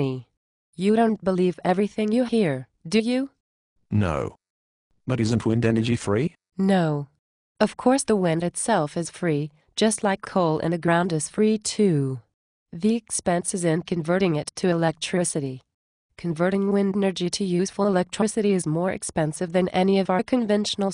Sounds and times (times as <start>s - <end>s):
Speech: 0.0s - 4.4s, 5.1s - 12.2s, 12.8s - 15.6s, 16.2s - 20.9s.